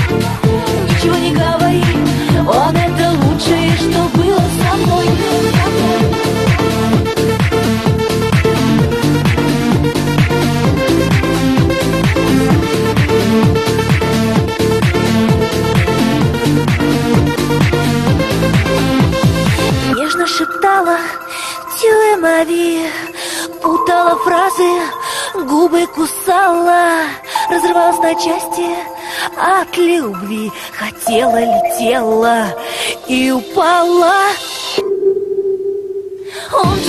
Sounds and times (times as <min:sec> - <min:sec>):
Trance music: 0:00.0 - 0:36.8.